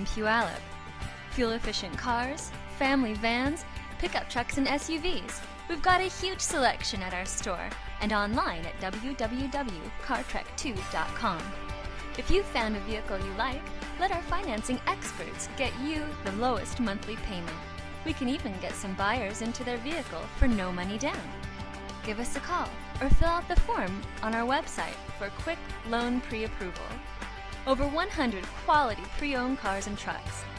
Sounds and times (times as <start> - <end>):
Speech: 0.0 - 0.6, 1.4 - 11.6, 12.2 - 21.3, 22.1 - 27.0, 27.7 - 30.4
Music: 0.0 - 30.5.